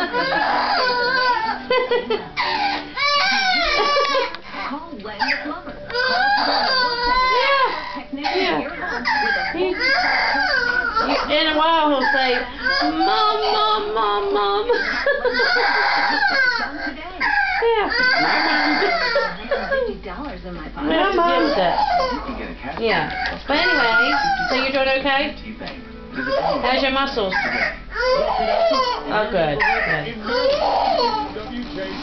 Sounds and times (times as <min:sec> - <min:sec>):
Baby cry, infant cry: 0:00.0 - 0:01.7, 0:02.4 - 0:19.9, 0:20.9 - 0:24.8, 0:26.2 - 0:31.4
Speech: 0:04.6 - 0:14.7.